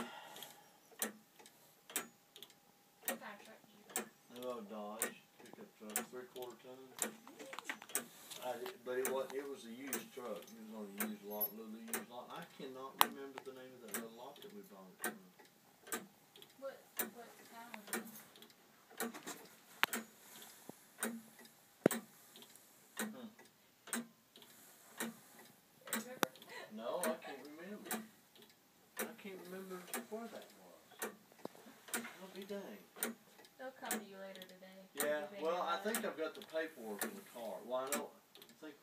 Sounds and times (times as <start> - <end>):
Tick-tock: 0.4 - 3.2, 11.9 - 12.1, 13.0 - 17.1, 19.8 - 26.4, 33.0 - 35.1, 37.8 - 38.7
Tick: 1.0 - 3.2, 19.8 - 20.0, 21.0 - 26.4, 33.0 - 34.6.